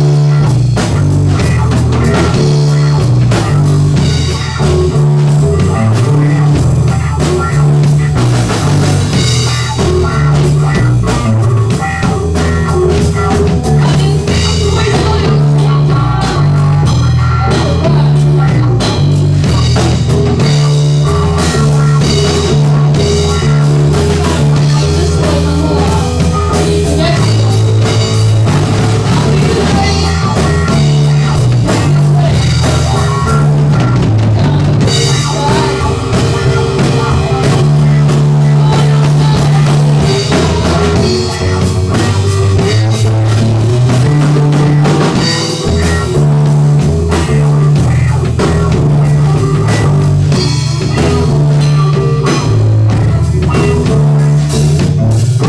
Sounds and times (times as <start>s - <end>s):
Guitar: 0.0s - 55.4s
Psychedelic rock: 0.0s - 55.4s.